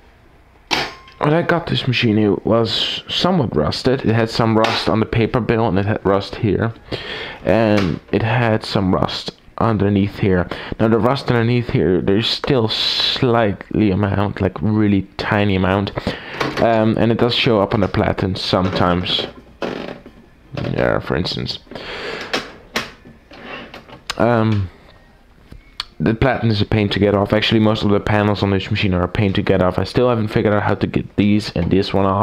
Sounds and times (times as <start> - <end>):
Speech: 1.2 - 6.8, 7.4 - 19.4, 20.5 - 21.7, 24.1 - 24.7, 25.8 - 32.2.